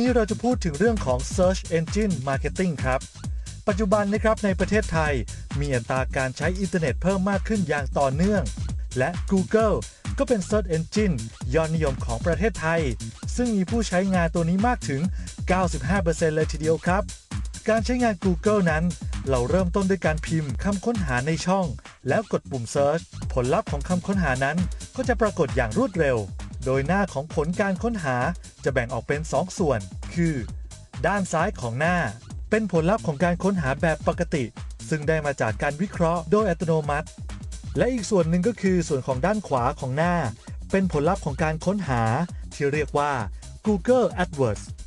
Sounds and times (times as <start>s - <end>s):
Speech: 0.0s - 3.1s, 3.7s - 17.1s, 17.7s - 37.1s, 37.8s - 44.8s
Music: 0.0s - 44.8s.